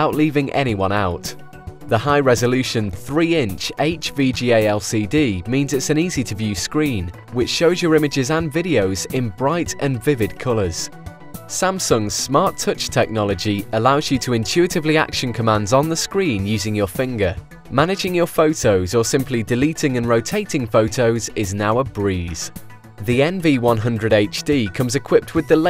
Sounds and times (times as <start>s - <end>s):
Speech: 0.0s - 10.9s, 11.5s - 25.7s
Music: 0.0s - 25.7s.